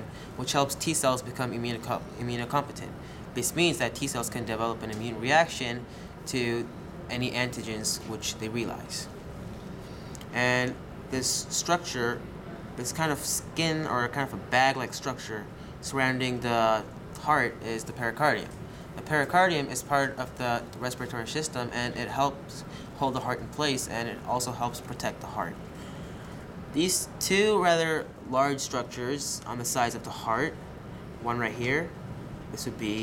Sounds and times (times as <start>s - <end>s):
Speech: 0.0s - 9.2s, 10.3s - 12.2s, 12.8s - 25.6s, 26.8s - 30.6s, 31.2s - 33.0s.